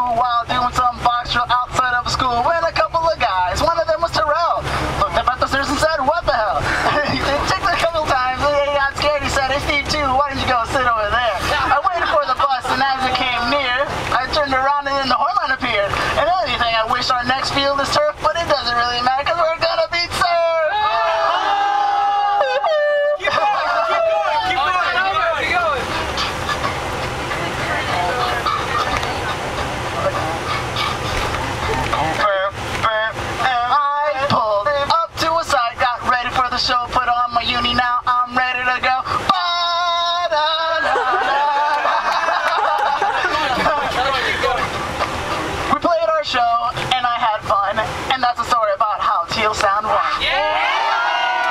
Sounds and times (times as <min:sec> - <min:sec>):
Crowd: 0:00.0 - 0:01.0, 0:01.6 - 0:16.4, 0:17.0 - 0:37.2, 0:38.9 - 0:51.5.